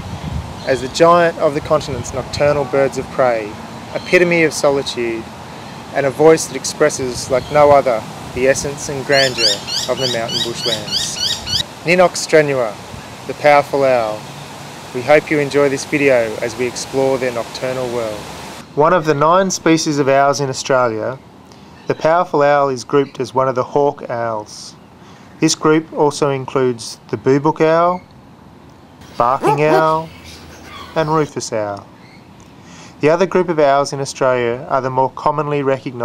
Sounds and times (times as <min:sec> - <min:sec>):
Speech: 0:00.7 - 0:05.3, 0:06.0 - 0:11.2, 0:11.9 - 0:14.2, 0:15.0 - 0:18.2, 0:18.8 - 0:21.2, 0:21.9 - 0:24.8, 0:25.4 - 0:28.0, 0:29.1 - 0:30.4, 0:31.0 - 0:31.9, 0:33.0 - 0:36.0.